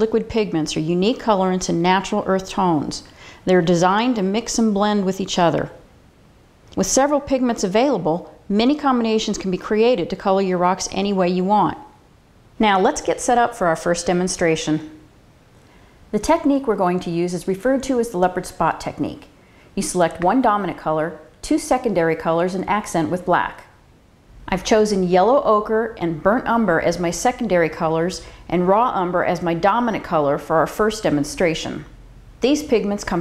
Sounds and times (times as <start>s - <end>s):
Speech: 0.0s - 5.8s, 6.8s - 12.0s, 12.6s - 15.0s, 16.1s - 23.8s, 24.5s - 33.2s.